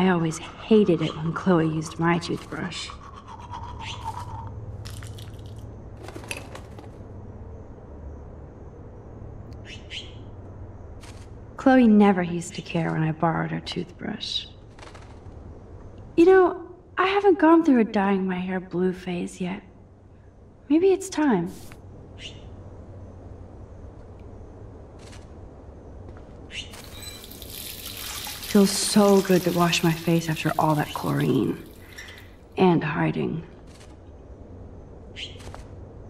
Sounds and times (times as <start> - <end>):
Sink (filling or washing): 26.8 - 32.4
Water tap, faucet: 26.8 - 32.4
Water: 26.8 - 32.5.